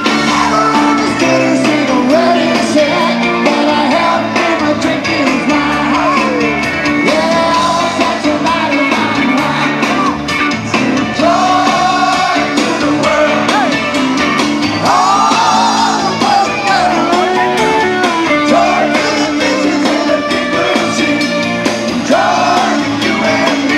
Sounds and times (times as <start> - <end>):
Music: 0.0 - 23.7.